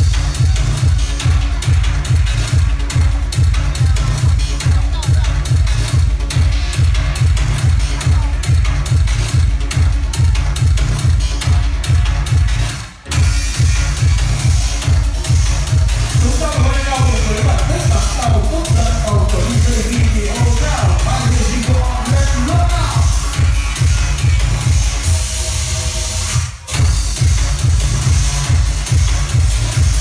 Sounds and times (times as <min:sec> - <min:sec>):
Disco: 0:00.0 - 0:30.0
Speech: 0:03.6 - 0:06.1, 0:07.6 - 0:08.8, 0:16.2 - 0:23.1.